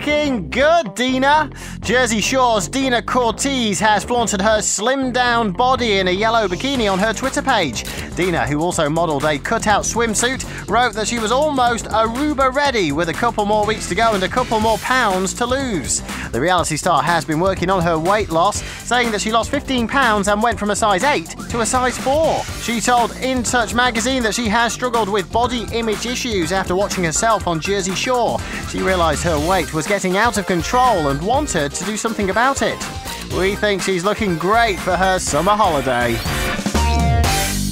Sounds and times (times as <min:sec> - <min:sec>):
Speech: 0:00.0 - 0:36.3
Music: 0:00.0 - 0:37.7.